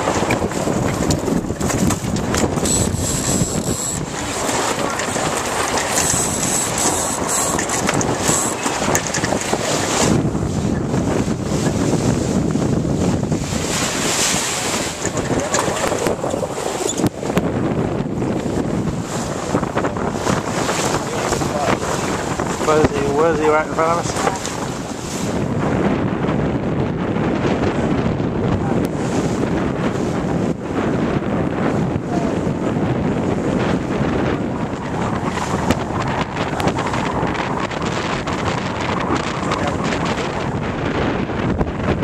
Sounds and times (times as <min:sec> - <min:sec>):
Sailboat, sailing ship: 0:00.0 - 0:42.0.